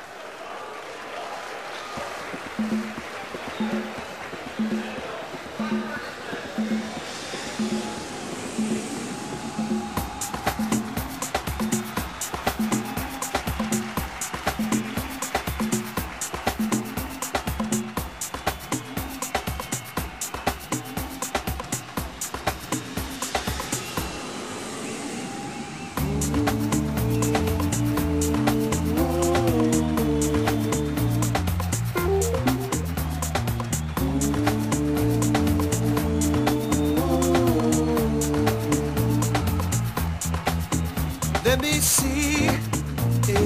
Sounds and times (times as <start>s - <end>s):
Music: 1.9s - 43.4s.